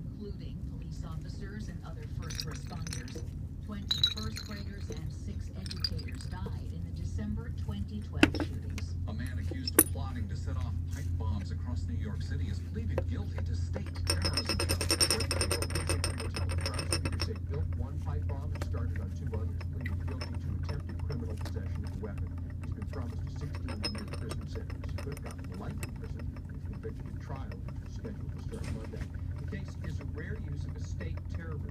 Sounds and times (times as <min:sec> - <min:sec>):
Speech: 0:00.0 - 0:31.7.